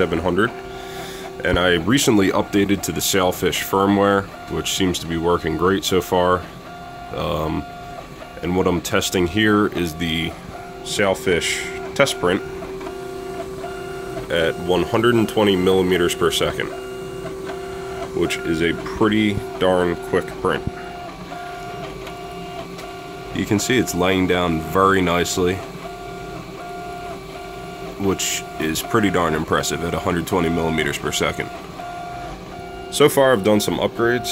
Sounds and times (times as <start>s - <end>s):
Speech: 0.0s - 0.6s, 1.4s - 6.4s, 7.1s - 7.7s, 8.4s - 12.5s, 14.3s - 16.8s, 18.2s - 20.8s, 23.4s - 25.7s, 28.0s - 31.5s, 32.9s - 34.3s
Printer: 0.0s - 34.3s.